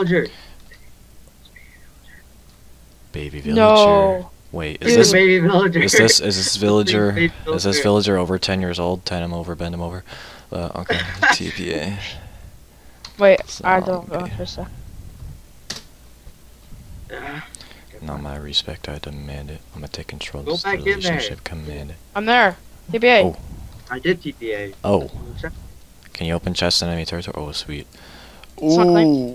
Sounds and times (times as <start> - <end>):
Speech: 3.2 - 12.2, 18.0 - 22.0, 22.9 - 25.5, 26.1 - 27.8.